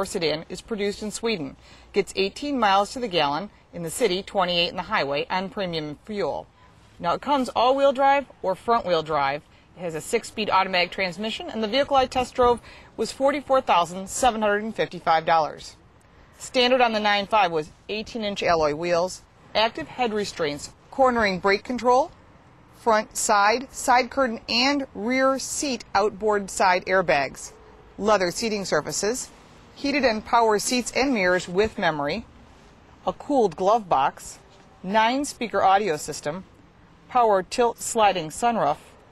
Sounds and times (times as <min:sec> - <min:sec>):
Speech: 0:00.0 - 0:06.4, 0:07.0 - 0:15.8, 0:16.4 - 0:22.1, 0:22.8 - 0:32.2, 0:33.1 - 0:36.4, 0:37.1 - 0:38.9.